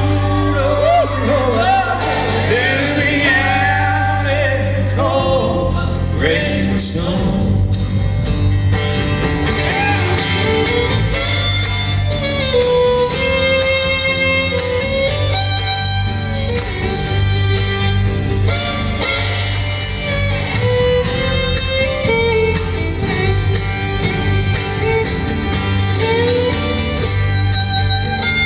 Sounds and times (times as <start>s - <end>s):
Music: 0.0s - 28.4s.